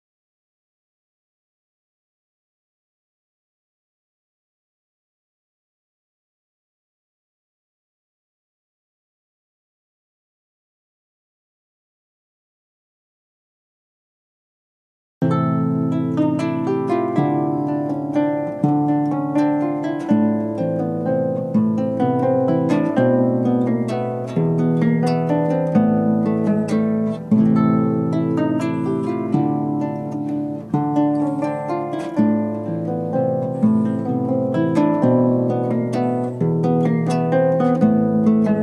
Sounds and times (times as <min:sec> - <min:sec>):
Harp: 0:15.2 - 0:38.6
Pizzicato: 0:15.3 - 0:38.6.